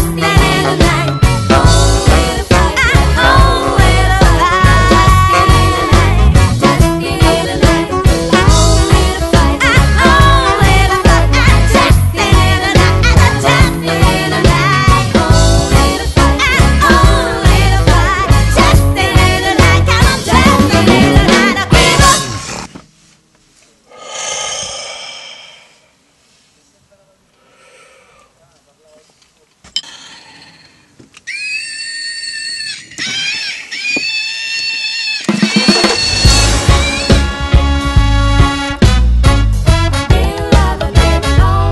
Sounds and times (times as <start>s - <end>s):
Reggae: 0.0s - 22.8s, 35.2s - 41.7s.